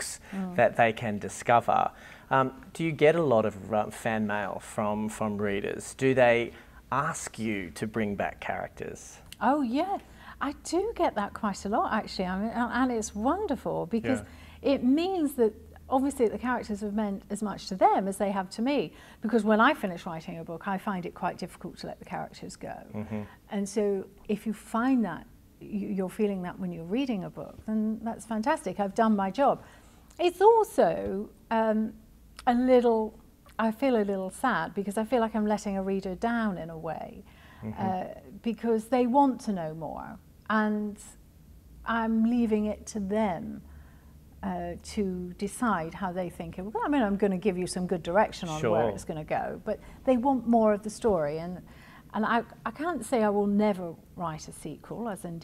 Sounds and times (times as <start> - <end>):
Speech: 0.0 - 1.4, 11.0 - 15.4, 23.0 - 25.0, 37.6 - 41.0, 44.5 - 51.4
Inside, small room: 0.0 - 55.4.